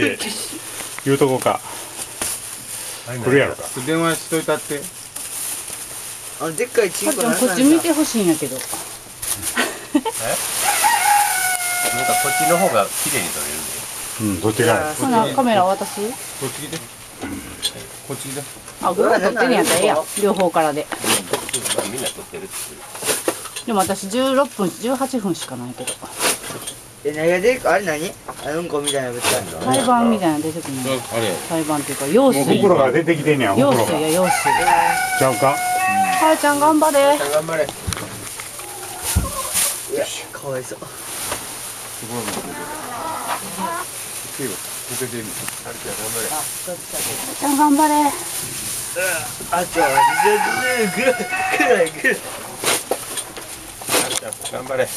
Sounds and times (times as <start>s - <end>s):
Livestock, farm animals, working animals: 10.2s - 13.3s, 14.2s - 16.4s, 29.2s - 32.7s, 33.5s - 39.9s, 42.1s - 44.1s, 49.2s - 52.6s.